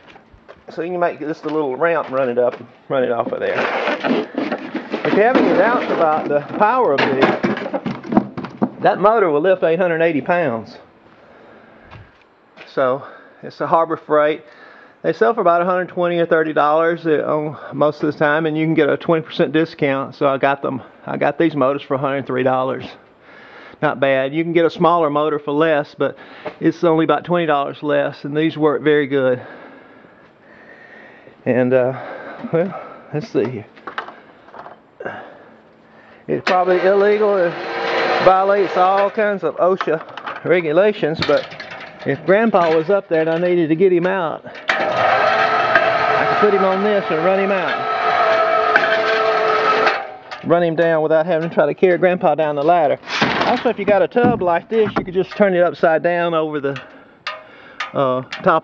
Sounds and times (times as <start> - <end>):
Speech: 0.7 - 3.7, 5.0 - 7.4, 8.8 - 10.8, 12.6 - 23.0, 23.8 - 29.5, 31.4 - 33.7, 36.3 - 37.6, 38.2 - 41.4, 42.0 - 44.5, 46.2 - 47.8, 50.4 - 56.8, 57.9 - 58.6
Outside, rural or natural: 32.0 - 55.5, 56.7 - 58.6.